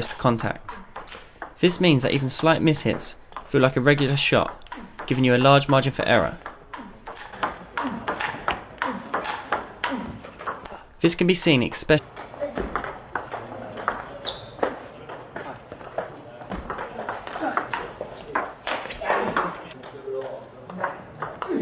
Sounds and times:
Inside, large room or hall: 0.0s - 11.0s, 12.0s - 21.6s.

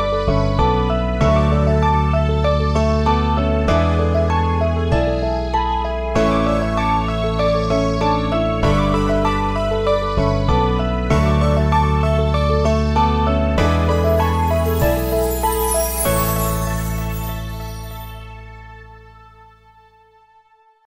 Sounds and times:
Music: 0.0s - 20.8s.

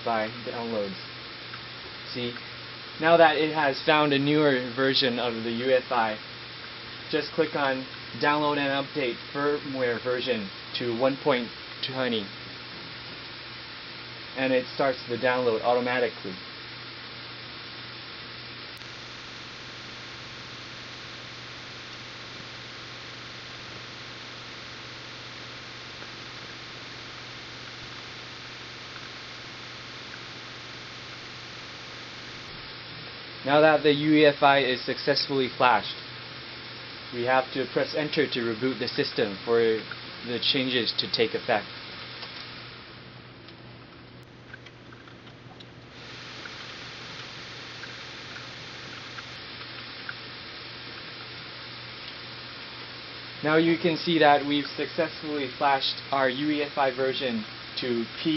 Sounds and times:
Speech: 0.0s - 1.1s, 2.1s - 2.4s, 3.0s - 6.2s, 7.1s - 12.4s, 14.4s - 16.4s, 33.4s - 36.0s, 37.1s - 41.7s, 53.4s - 58.3s.

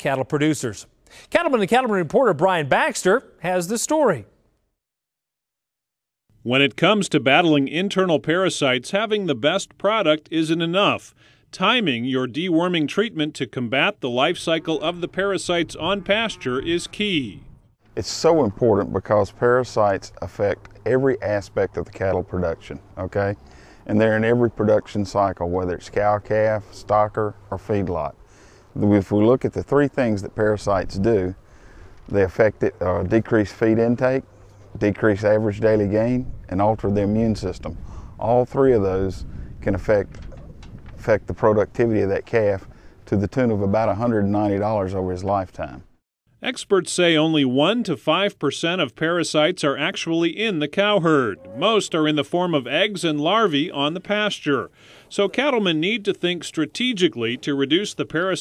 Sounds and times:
Speech: 0.0s - 4.3s, 6.4s - 28.2s, 28.8s - 31.4s, 32.1s - 34.2s, 34.8s - 40.4s, 41.0s - 58.4s.

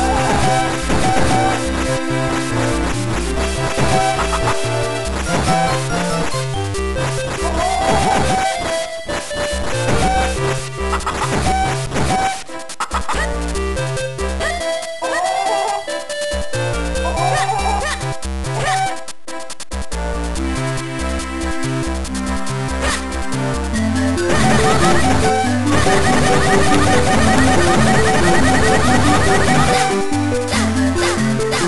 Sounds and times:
Music: 0.0s - 31.6s.

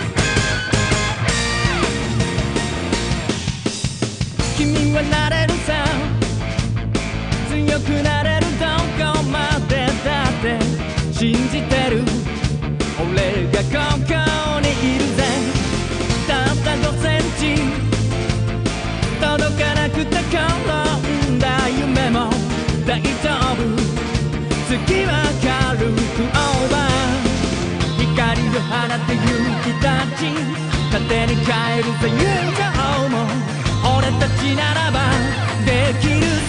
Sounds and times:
Music: 0.0s - 36.4s.

